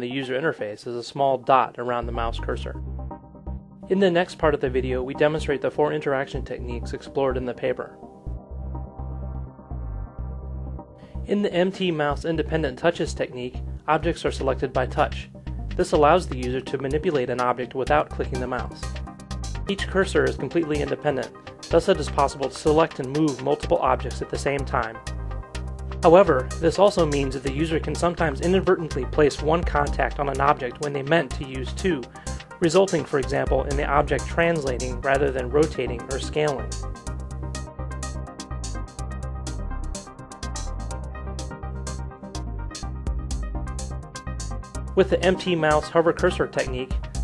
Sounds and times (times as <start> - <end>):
Speech: 0.0 - 2.8, 3.9 - 8.0, 11.3 - 18.9, 19.7 - 25.0, 26.0 - 36.8, 45.0 - 47.0
Music: 0.0 - 47.2.